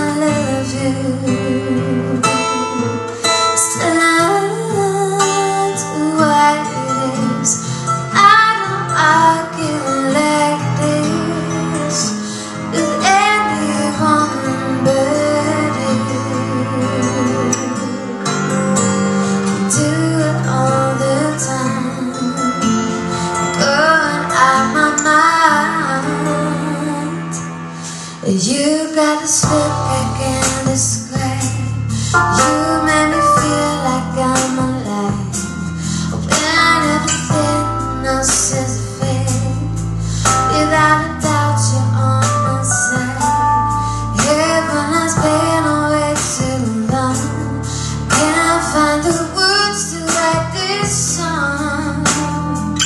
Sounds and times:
Female singing: 0.0 - 2.7, 3.6 - 17.9, 19.7 - 22.6, 23.6 - 27.4, 28.2 - 39.8, 40.5 - 43.4, 44.2 - 52.8
Music: 0.0 - 52.8.

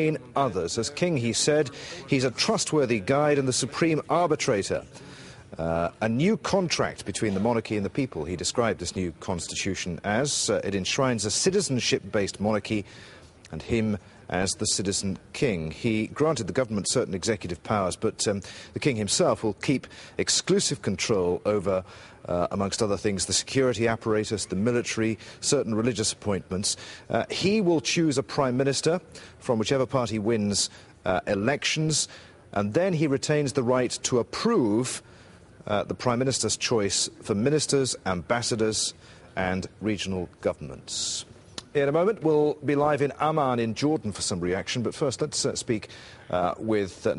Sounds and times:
Male speech, man speaking: 0.0 - 4.9, 5.6 - 12.9, 13.5 - 35.0, 35.6 - 47.1
Narration, monologue: 0.0 - 47.1.

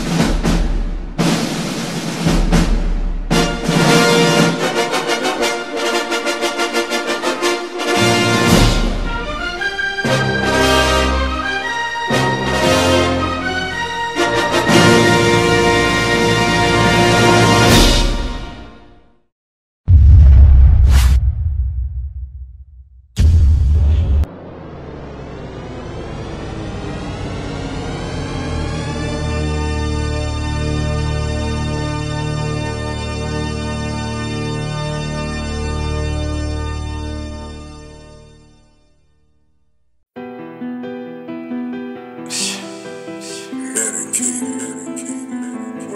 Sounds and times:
Music: 0.0 - 19.3, 25.6 - 45.9.

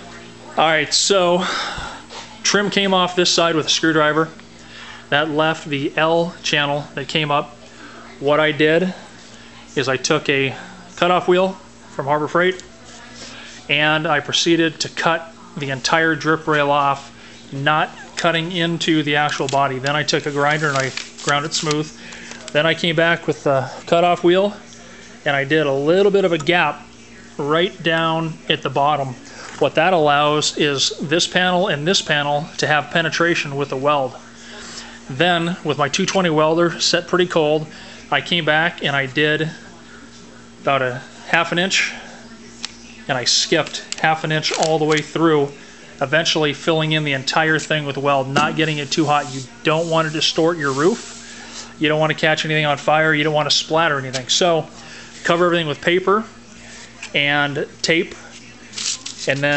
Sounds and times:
Speech: 0.0 - 59.5.

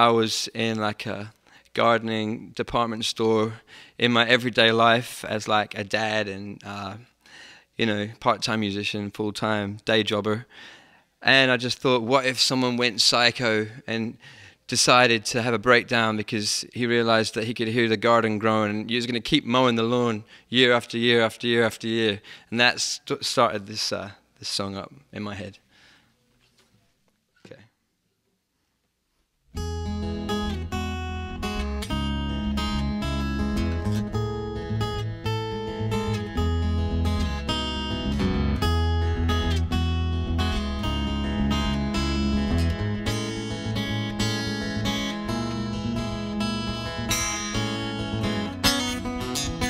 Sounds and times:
Speech: 0.0 - 7.1, 7.8 - 10.5, 11.2 - 25.6, 27.4 - 27.8
Acoustic guitar: 29.5 - 49.6.

